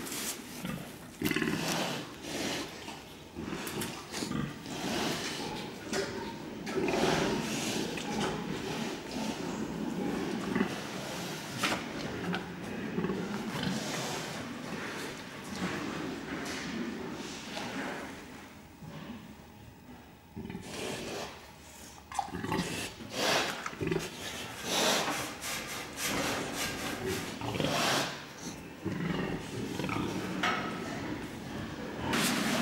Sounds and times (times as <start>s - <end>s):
Oink: 0.6s - 2.8s, 3.4s - 16.8s, 20.4s - 21.4s, 22.1s - 25.1s, 26.1s - 32.6s.